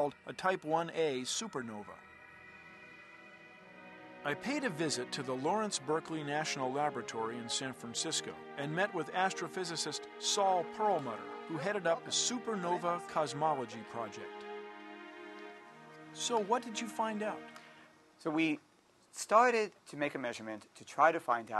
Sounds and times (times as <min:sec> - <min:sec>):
Speech: 0:00.0 - 0:02.0, 0:04.3 - 0:14.3, 0:16.2 - 0:17.4, 0:18.2 - 0:18.6, 0:19.2 - 0:21.6
Music: 0:00.0 - 0:18.6.